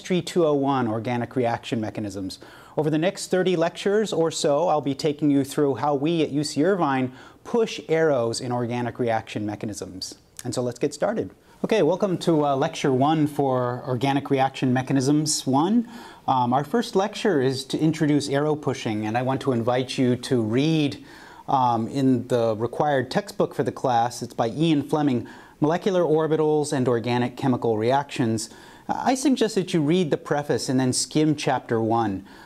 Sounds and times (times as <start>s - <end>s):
Speech: 0.0s - 32.3s.